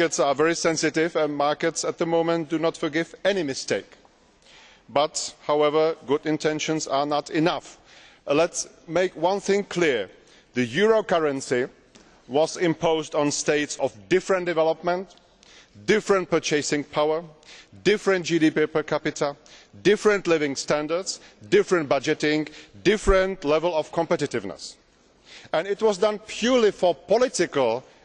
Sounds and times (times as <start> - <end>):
Male speech, man speaking: 0.0 - 4.0, 4.9 - 15.1, 15.8 - 24.8, 25.5 - 27.9
Narration, monologue: 0.0 - 28.0.